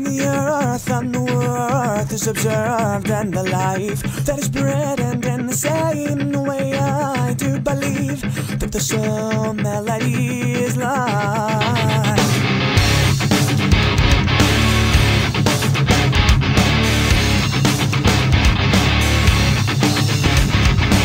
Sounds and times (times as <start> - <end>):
Music: 0.0 - 21.0.